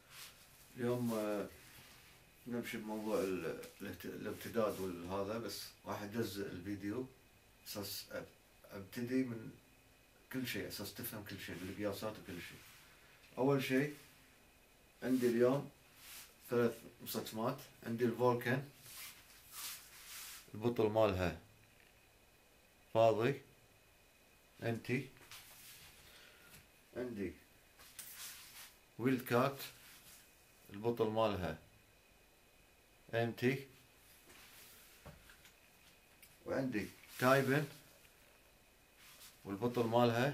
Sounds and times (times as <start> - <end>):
Speech: 0.7 - 1.6, 2.4 - 9.6, 10.3 - 12.6, 13.4 - 14.0, 15.0 - 15.8, 16.5 - 18.8, 20.5 - 21.5, 22.9 - 23.5, 24.6 - 25.2, 26.9 - 27.4, 29.0 - 29.8, 30.7 - 31.6, 33.1 - 33.8, 36.4 - 37.8, 39.4 - 40.3.